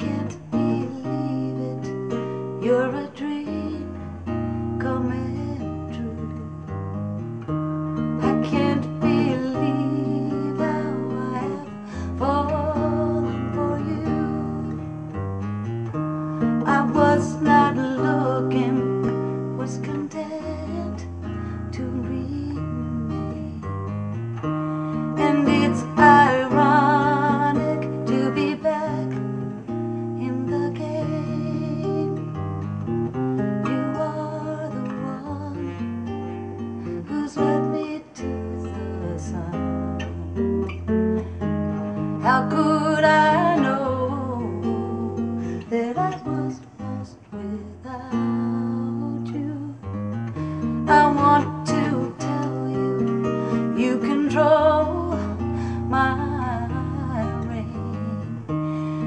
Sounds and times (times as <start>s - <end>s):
Music: 0.0s - 59.0s.